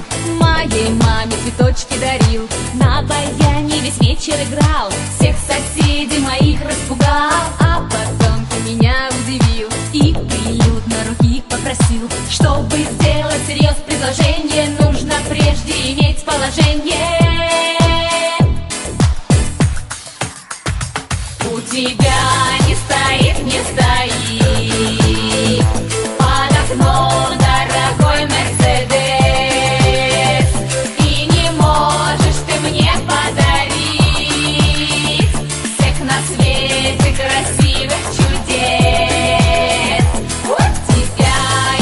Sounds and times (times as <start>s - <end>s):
Music: 0.0s - 41.8s.